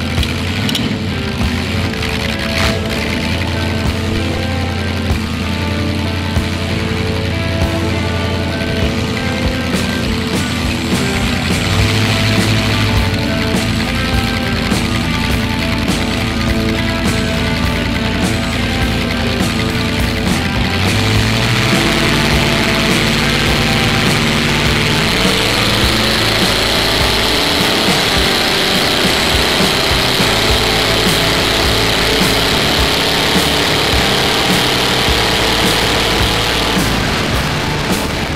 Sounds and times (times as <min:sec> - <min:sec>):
Car: 0:00.0 - 0:38.3
Music: 0:00.0 - 0:38.3.